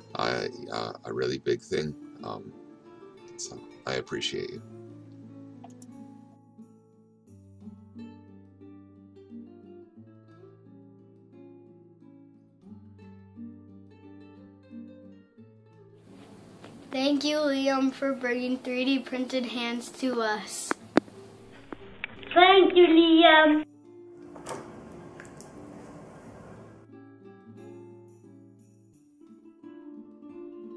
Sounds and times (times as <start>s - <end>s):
Music: 0.0s - 30.7s
Child speech, kid speaking: 16.9s - 20.8s, 22.3s - 23.7s.